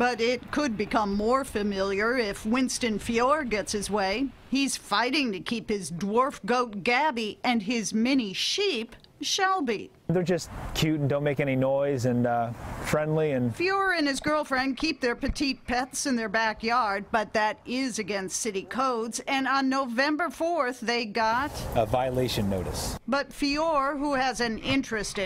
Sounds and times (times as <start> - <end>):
Speech: 9.8 - 20.6, 21.2 - 25.2.